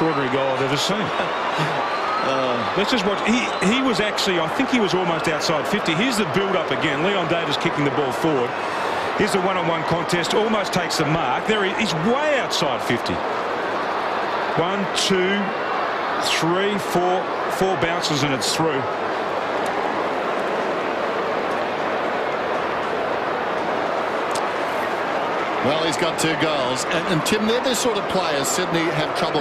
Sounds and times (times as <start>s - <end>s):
Speech: 2.3s - 8.5s, 9.2s - 13.2s, 14.6s - 15.5s, 16.2s - 18.9s, 25.6s - 29.4s.